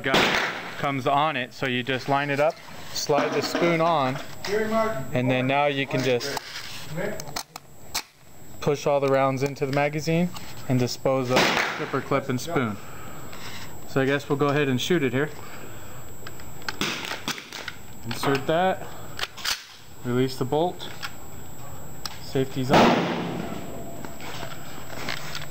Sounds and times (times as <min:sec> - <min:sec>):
Gunshot, gunfire: 0:00.1 - 0:00.7, 0:11.3 - 0:12.0, 0:16.8 - 0:17.5, 0:22.7 - 0:23.6.